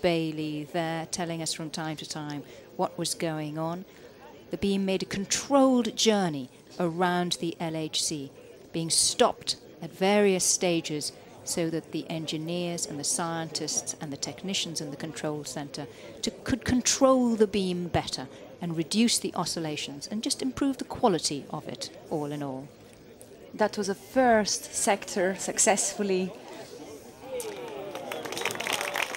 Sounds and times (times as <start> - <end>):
Speech: 0.0 - 22.7, 23.5 - 28.0.